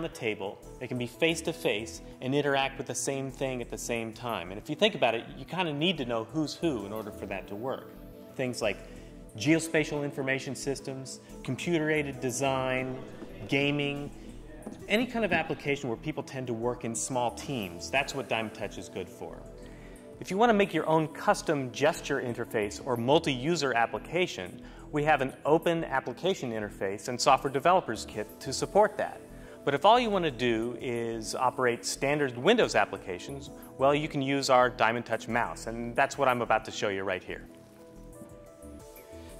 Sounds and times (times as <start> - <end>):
Speech: 0.0 - 8.8, 9.4 - 19.4, 20.2 - 37.5
Music: 0.0 - 39.3.